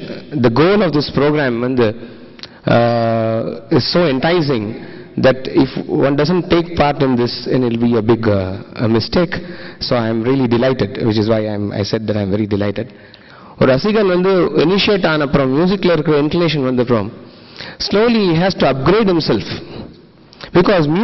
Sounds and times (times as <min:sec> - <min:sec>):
Speech: 0:00.0 - 0:02.0, 0:02.7 - 0:12.9, 0:13.6 - 0:17.2, 0:17.8 - 0:19.7, 0:20.5 - 0:21.0.